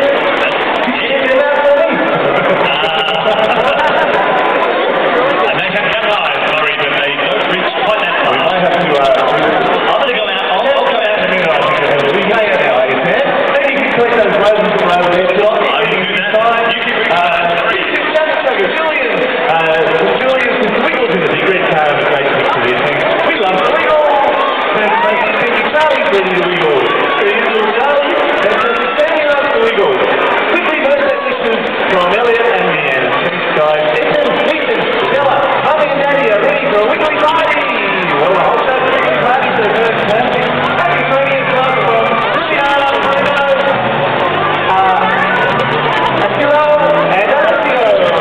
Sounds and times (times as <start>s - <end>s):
Speech: 0.0s - 48.2s.